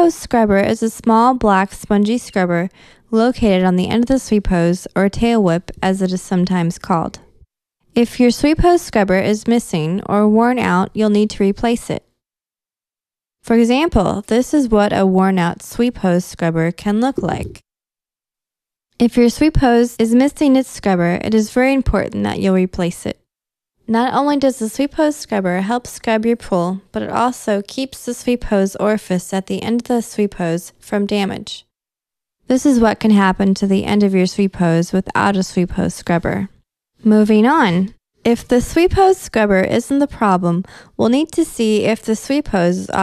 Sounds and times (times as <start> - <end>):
Speech: 0.0 - 7.3, 8.0 - 12.1, 13.4 - 17.6, 19.0 - 23.2, 23.9 - 31.7, 32.5 - 43.0.